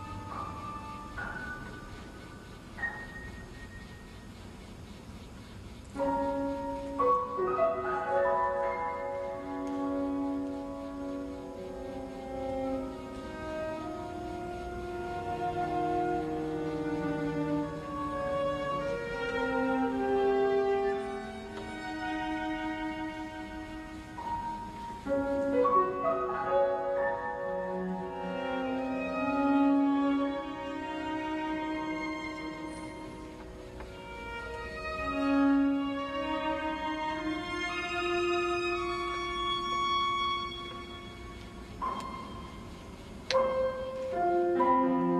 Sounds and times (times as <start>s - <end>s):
Cello: 0.0s - 45.1s
Violin, fiddle: 0.0s - 45.1s.